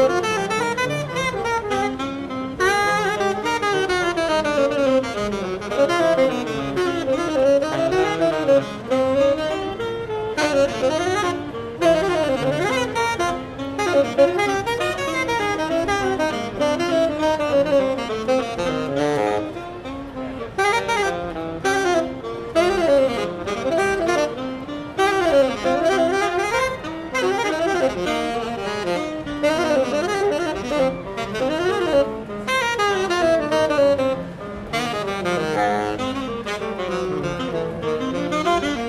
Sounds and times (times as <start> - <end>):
Jazz: 0.0 - 38.8
Saxophone: 0.0 - 38.8.